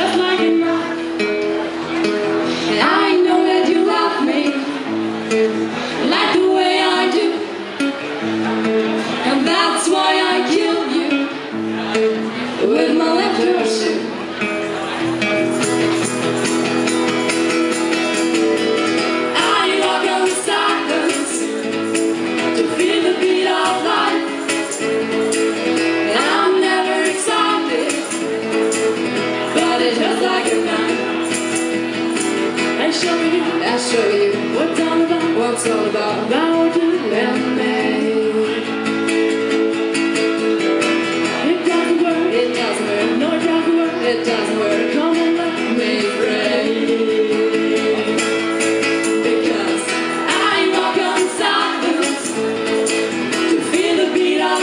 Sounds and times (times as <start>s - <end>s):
Music: 0.0s - 54.6s.